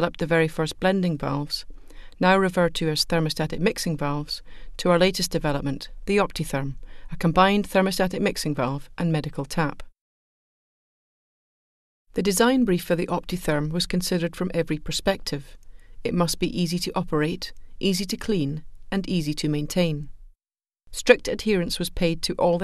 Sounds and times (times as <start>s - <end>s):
Speech: 0.0s - 1.6s, 2.2s - 9.9s, 12.2s - 20.1s, 21.0s - 22.6s.